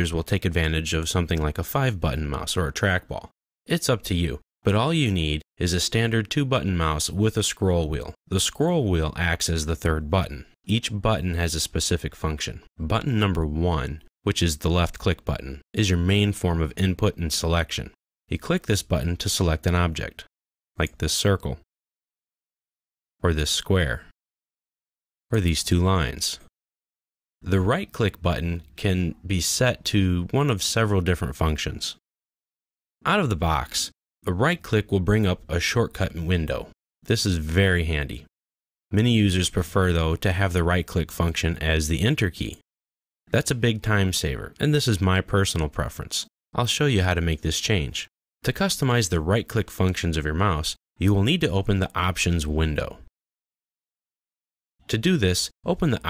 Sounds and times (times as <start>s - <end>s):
Speech: 0.0s - 21.7s, 23.2s - 24.2s, 25.3s - 26.5s, 27.4s - 32.0s, 33.0s - 38.3s, 38.9s - 42.6s, 43.3s - 53.1s, 54.8s - 56.0s.